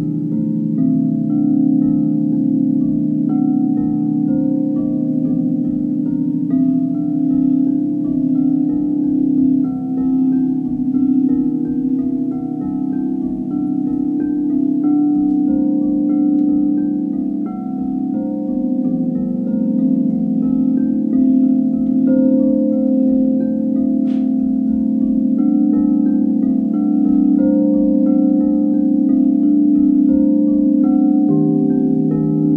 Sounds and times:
Singing bowl: 0:00.0 - 0:32.5.

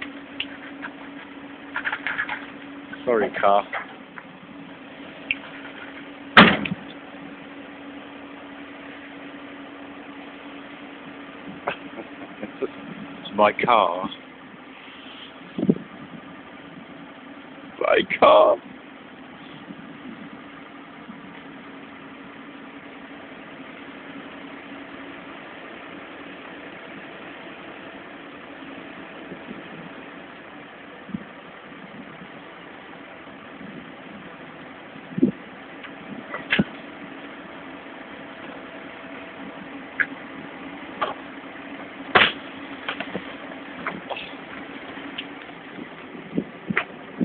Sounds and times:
Vehicle: 0:00.0 - 0:47.2.

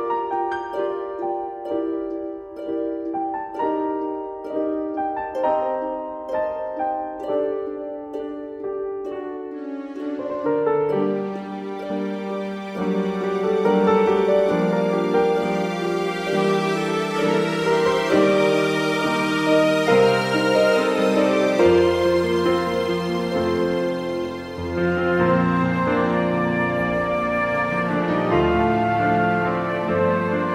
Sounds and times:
Background music: 0:00.0 - 0:30.5
Orchestra: 0:00.0 - 0:30.5.

